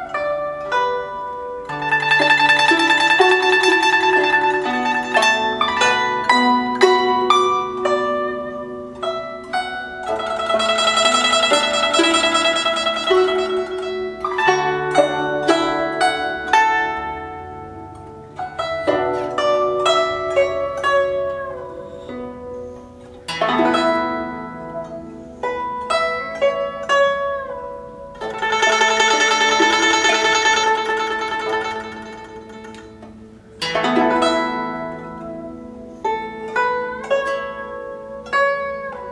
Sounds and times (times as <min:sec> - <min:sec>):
Music: 0:00.0 - 0:39.1.